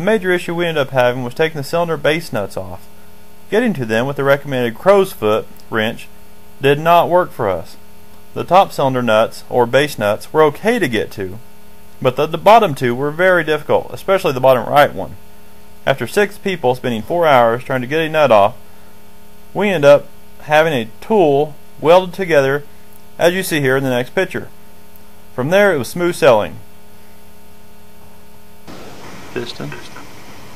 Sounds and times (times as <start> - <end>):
Speech: 0.0 - 2.9, 3.5 - 7.8, 8.4 - 11.4, 12.0 - 15.2, 15.9 - 18.6, 19.6 - 24.5, 25.4 - 26.6, 29.4 - 30.0.